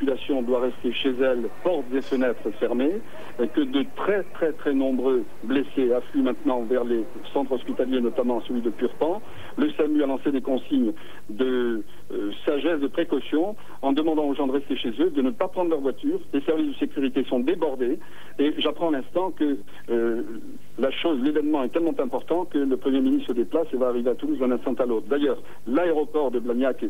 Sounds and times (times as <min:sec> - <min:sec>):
Speech: 0:00.0 - 0:26.8.